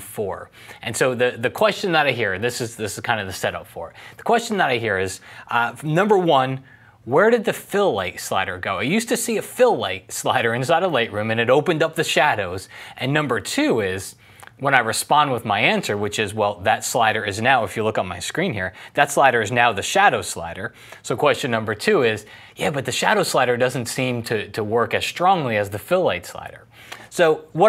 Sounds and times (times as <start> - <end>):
Speech: 0.0 - 27.6.